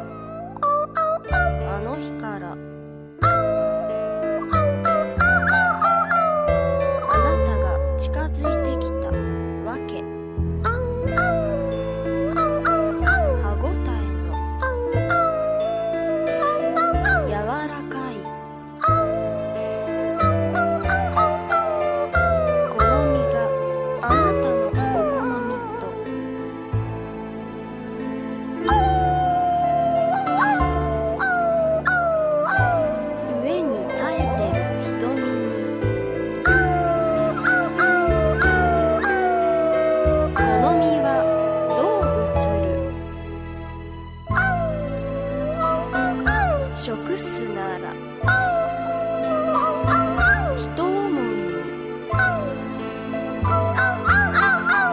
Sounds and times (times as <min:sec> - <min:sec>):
Music: 0:00.0 - 0:54.9
Speech: 0:01.6 - 0:02.6, 0:07.0 - 0:10.1, 0:13.2 - 0:14.3, 0:17.0 - 0:18.3, 0:22.7 - 0:26.0, 0:33.3 - 0:35.7, 0:40.4 - 0:42.9, 0:46.7 - 0:48.0, 0:50.5 - 0:51.7.